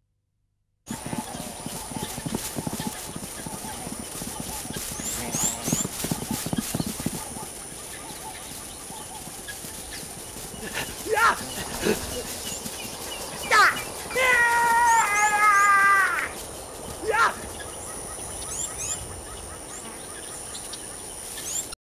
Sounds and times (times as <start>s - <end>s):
Outside, rural or natural: 0.0s - 21.8s
Animal: 0.9s - 21.8s
Speech: 5.1s - 5.8s, 11.0s - 12.3s, 13.4s - 16.4s, 17.0s - 17.4s.